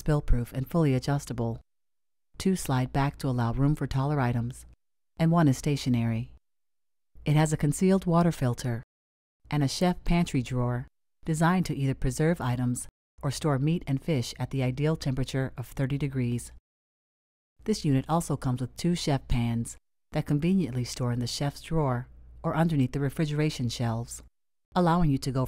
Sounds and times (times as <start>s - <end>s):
Speech: 0.0s - 1.6s, 2.4s - 6.4s, 7.2s - 8.9s, 9.5s - 16.6s, 17.6s - 25.4s.